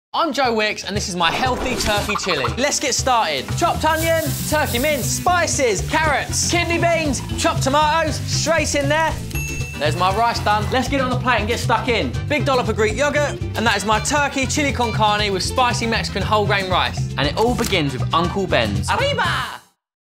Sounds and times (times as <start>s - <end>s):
Speech: 0.2s - 9.2s, 9.8s - 19.7s
Music: 0.2s - 19.9s.